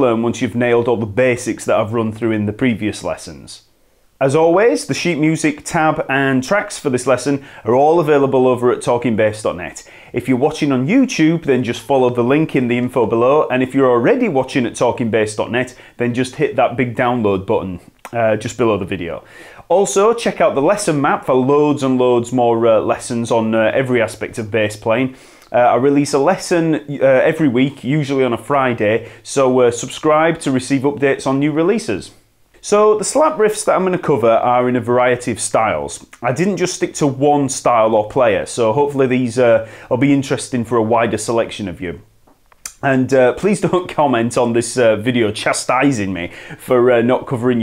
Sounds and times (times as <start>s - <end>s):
Speech: 0.0s - 42.1s, 42.7s - 47.6s.